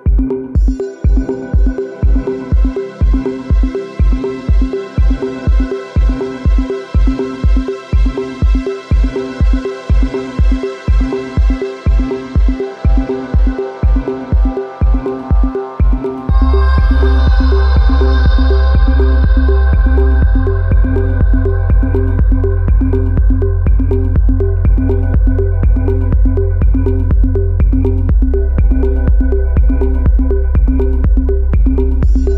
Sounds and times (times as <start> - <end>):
Electronica: 0.0 - 32.3.